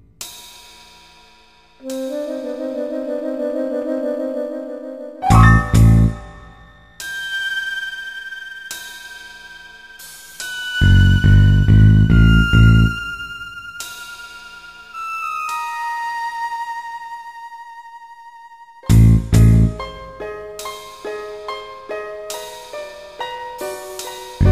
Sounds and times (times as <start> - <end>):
Music: 0.0 - 24.5.